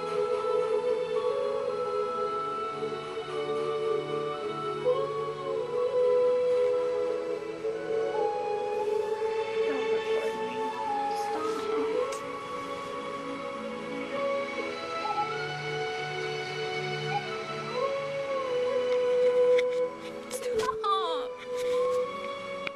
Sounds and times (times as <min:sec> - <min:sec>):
Music: 0:00.0 - 0:22.7
Speech: 0:20.4 - 0:21.4.